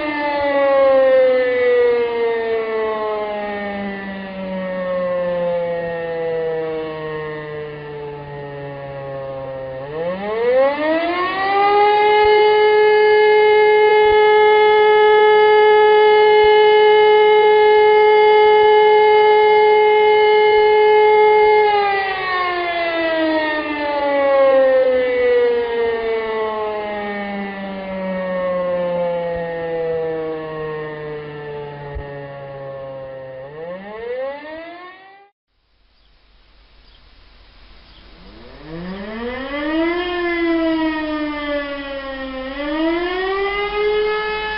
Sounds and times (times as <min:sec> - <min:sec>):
Siren: 0:00.0 - 0:35.4, 0:37.6 - 0:44.5.